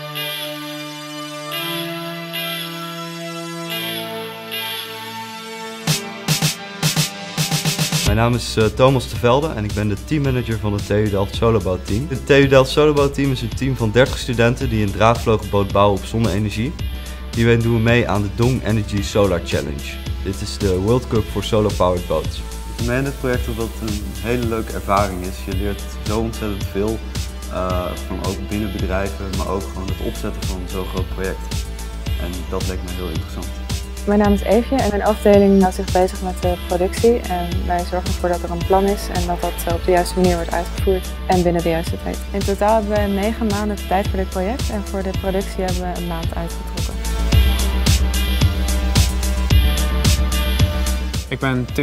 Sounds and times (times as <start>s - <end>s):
Music: 0.0s - 51.8s
Speech: 8.1s - 16.8s, 17.4s - 31.4s, 32.2s - 33.5s, 34.1s - 46.6s, 51.3s - 51.8s.